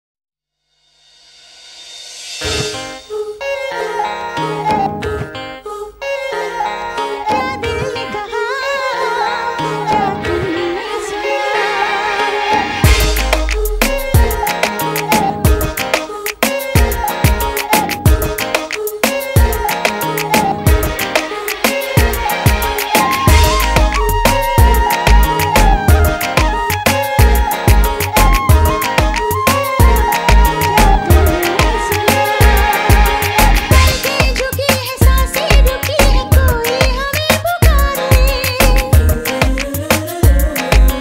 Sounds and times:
Music: 0:00.6 - 0:41.0.

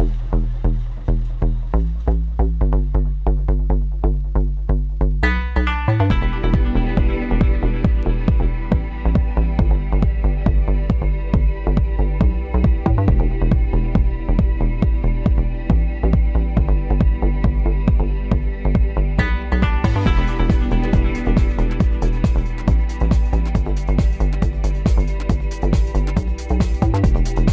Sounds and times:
Music: 0:00.0 - 0:27.5.

